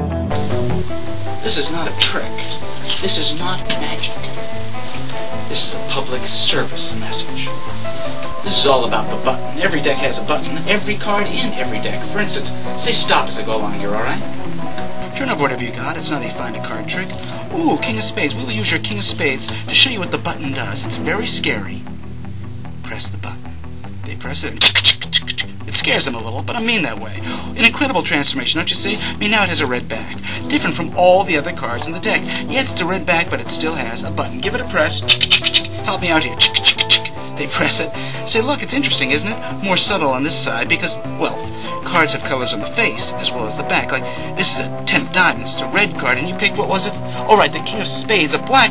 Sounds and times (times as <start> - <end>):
Music: 0.0 - 48.7
Speech: 1.4 - 4.4, 5.5 - 7.6, 8.4 - 14.4, 15.0 - 21.9, 22.8 - 23.4, 24.1 - 48.7.